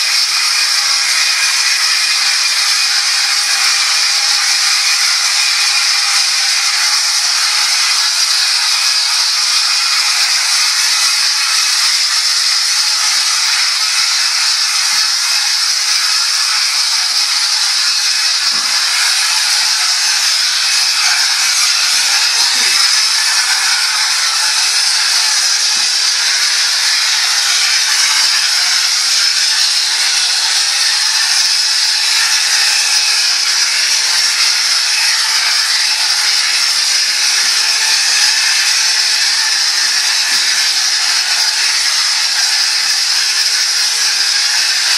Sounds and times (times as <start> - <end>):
Spray: 0.0 - 44.9.